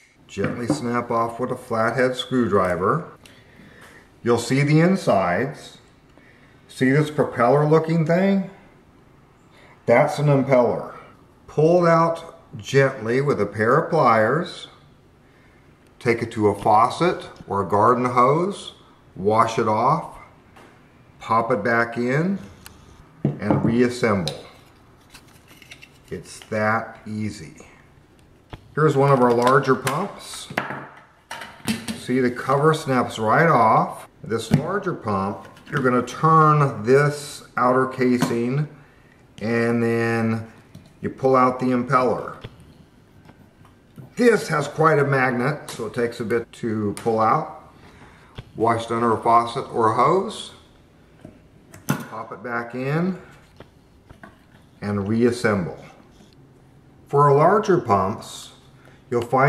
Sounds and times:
Speech: 0:00.0 - 0:03.2, 0:04.2 - 0:05.9, 0:06.7 - 0:08.6, 0:09.9 - 0:14.8, 0:16.0 - 0:20.4, 0:21.2 - 0:22.6, 0:23.3 - 0:24.6, 0:26.1 - 0:27.9, 0:28.8 - 0:30.7, 0:31.9 - 0:38.8, 0:39.4 - 0:42.5, 0:44.1 - 0:47.7, 0:48.6 - 0:50.7, 0:52.0 - 0:53.3, 0:54.8 - 0:56.0, 0:57.1 - 0:59.4.

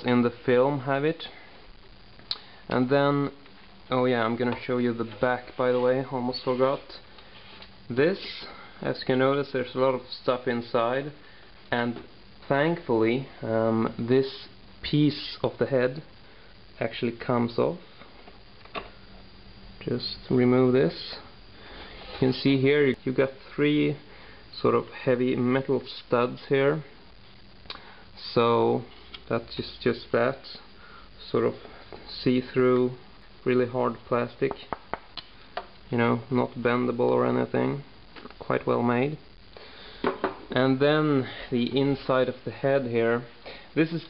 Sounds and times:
Speech: 0:00.0 - 0:01.4, 0:02.7 - 0:07.0, 0:07.9 - 0:16.1, 0:16.8 - 0:17.8, 0:19.8 - 0:21.3, 0:22.2 - 0:27.0, 0:28.2 - 0:34.7, 0:35.9 - 0:39.2, 0:40.5 - 0:44.0
Inside, small room: 0:00.0 - 0:44.0.

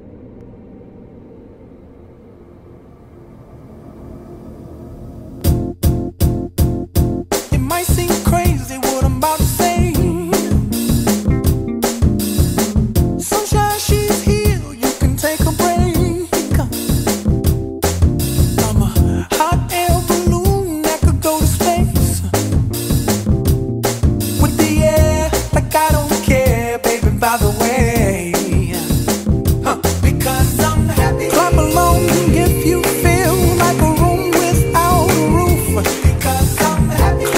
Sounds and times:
Hip hop music: 0:05.5 - 0:37.3
Music of Africa: 0:05.5 - 0:37.3
Pop music: 0:07.3 - 0:17.3, 0:18.3 - 0:23.2, 0:24.2 - 0:37.3.

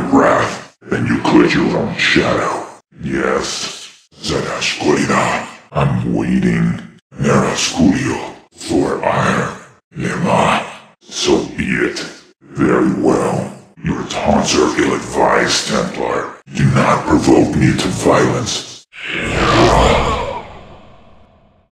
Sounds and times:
Speech: 0:00.0 - 0:20.9.

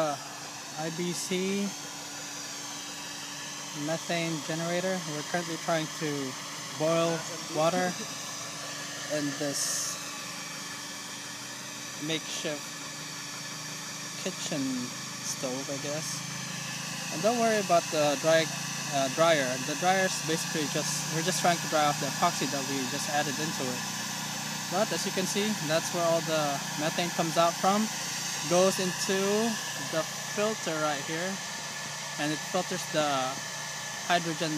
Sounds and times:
Outside, rural or natural: 0:00.0 - 0:34.5
Steam: 0:00.0 - 0:34.5
Speech: 0:00.8 - 0:01.8, 0:03.8 - 0:08.0, 0:09.1 - 0:10.0, 0:12.0 - 0:12.6, 0:14.2 - 0:16.2, 0:17.1 - 0:23.8, 0:24.7 - 0:31.4, 0:32.2 - 0:33.4, 0:34.1 - 0:34.5.

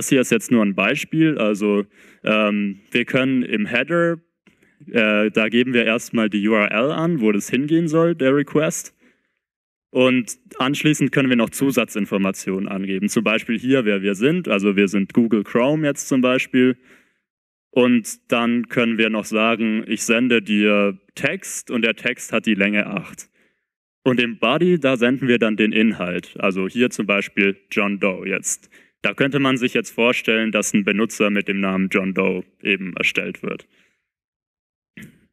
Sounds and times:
Speech: 0:00.0 - 0:09.0, 0:10.0 - 0:16.8, 0:17.7 - 0:23.3, 0:24.1 - 0:33.7.

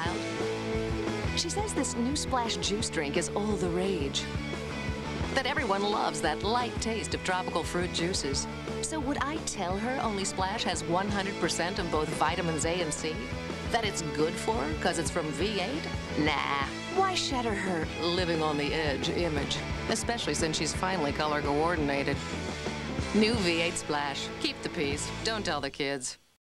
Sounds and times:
Music: 0:00.0 - 0:26.4
Speech: 0:01.4 - 0:04.3, 0:05.4 - 0:22.2, 0:23.1 - 0:26.2.

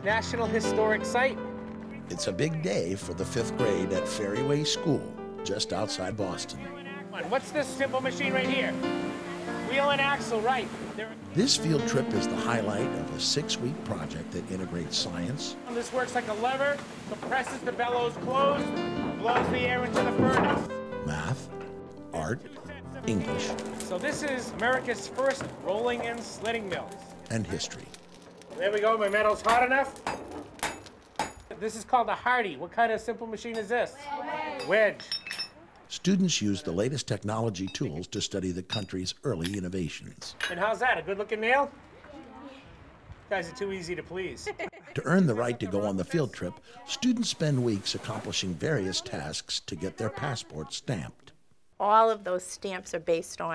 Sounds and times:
Music: 0:00.0 - 0:28.4
Speech: 0:02.0 - 0:08.7, 0:11.3 - 0:18.6, 0:19.2 - 0:21.5, 0:22.1 - 0:28.0, 0:35.9 - 0:41.7, 0:45.0 - 0:51.3.

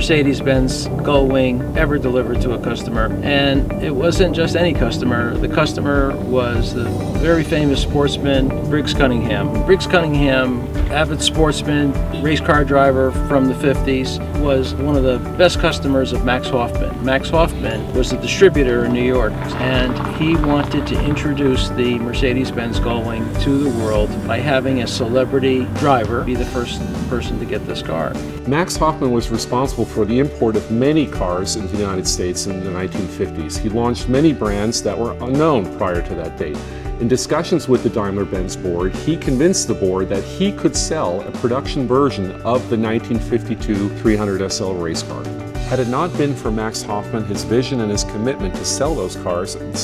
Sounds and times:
Music: 0:00.0 - 0:49.8
Speech: 0:00.0 - 0:49.8.

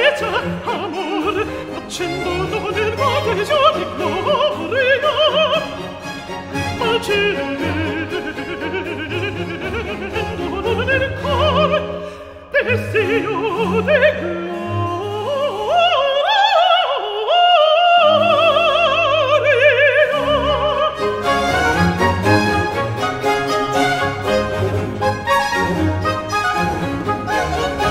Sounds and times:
Opera: 0:00.0 - 0:27.9
Orchestra: 0:00.0 - 0:27.9.

